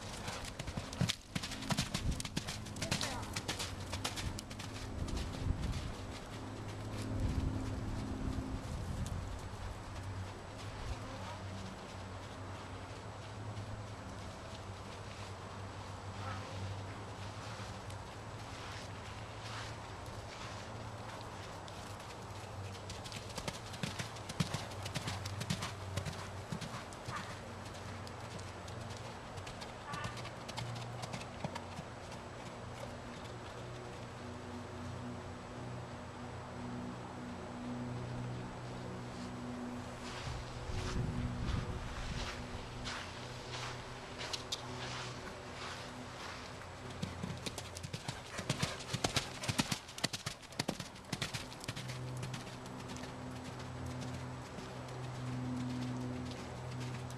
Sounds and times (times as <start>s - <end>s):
Clip-clop: 0.0s - 35.7s, 36.6s - 57.1s.